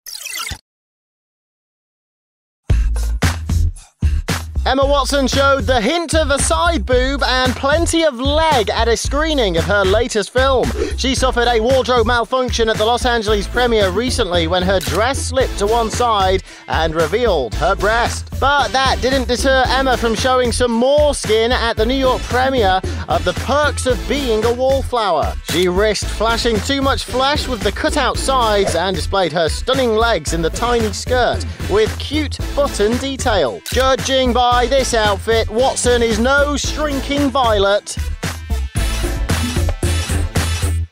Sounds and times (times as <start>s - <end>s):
Music: 2.7s - 40.9s
Speech: 4.6s - 38.0s.